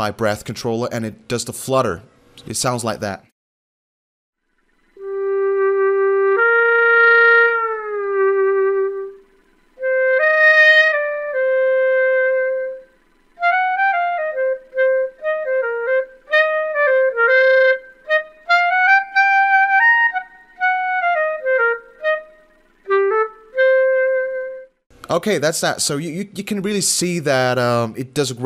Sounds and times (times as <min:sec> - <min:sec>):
Clarinet: 0:05.0 - 0:24.8.